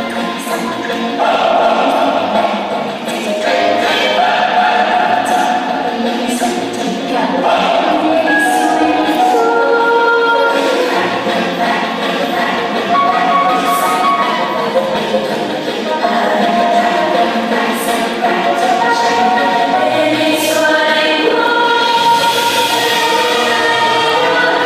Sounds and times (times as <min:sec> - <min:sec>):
Inside, large room or hall: 0:00.0 - 0:24.6
Music: 0:00.0 - 0:24.6.